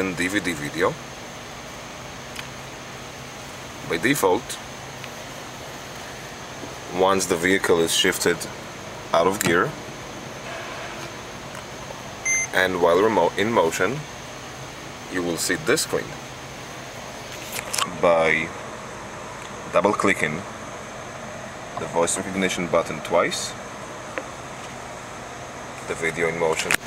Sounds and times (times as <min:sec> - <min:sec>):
Speech: 0:00.0 - 0:01.0, 0:03.8 - 0:04.6, 0:06.9 - 0:09.8, 0:12.5 - 0:14.1, 0:15.1 - 0:16.2, 0:17.8 - 0:18.5, 0:19.7 - 0:20.5, 0:21.8 - 0:23.6, 0:25.8 - 0:26.8.